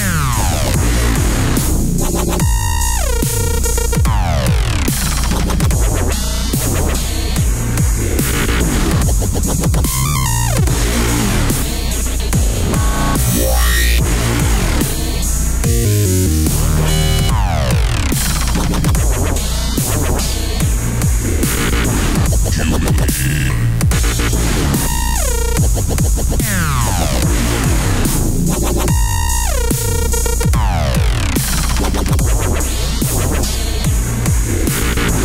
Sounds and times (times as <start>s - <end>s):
Dubstep: 0.0s - 35.2s.